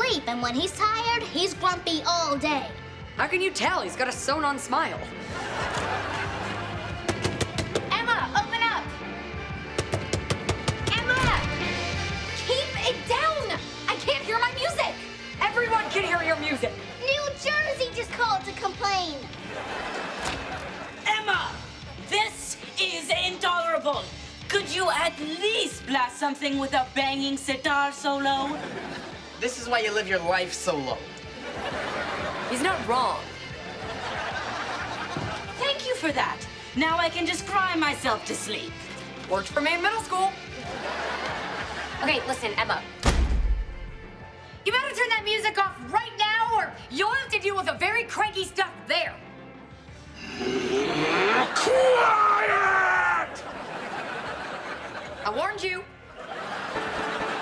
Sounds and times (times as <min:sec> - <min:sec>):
Music: 0:00.0 - 0:57.4.